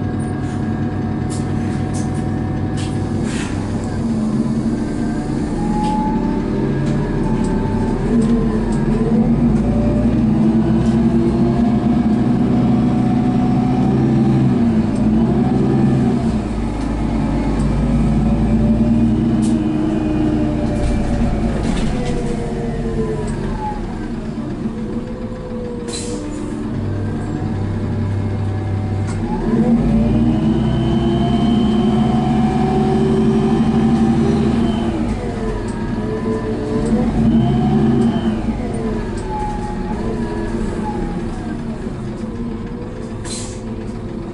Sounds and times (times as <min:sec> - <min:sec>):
Bus: 0:00.0 - 0:44.3.